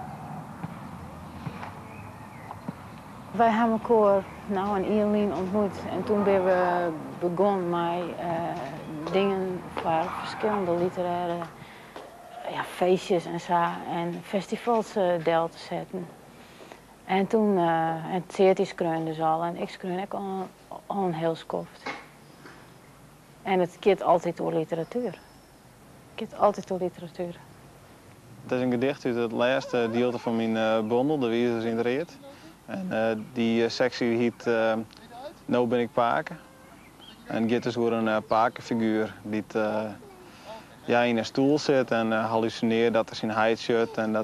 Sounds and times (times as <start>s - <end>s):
Outside, urban or manmade: 0.0s - 44.2s.